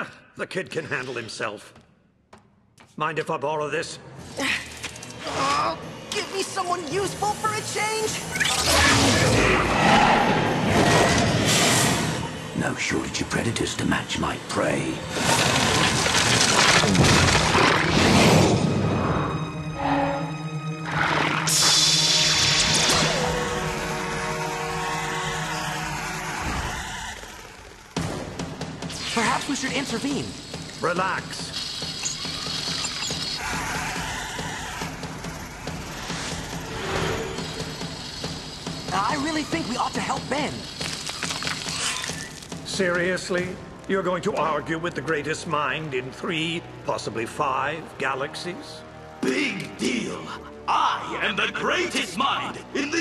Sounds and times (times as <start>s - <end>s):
Music: 2.4s - 53.0s.